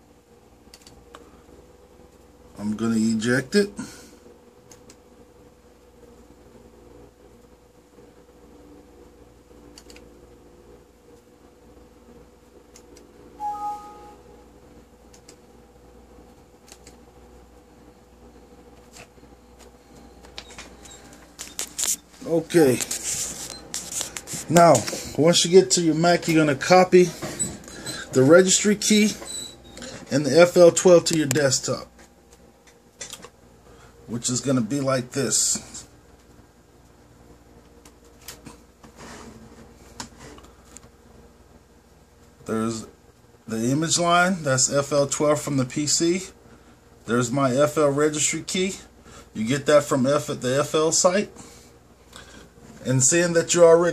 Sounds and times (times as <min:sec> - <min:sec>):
Inside, small room: 0:00.0 - 0:53.9.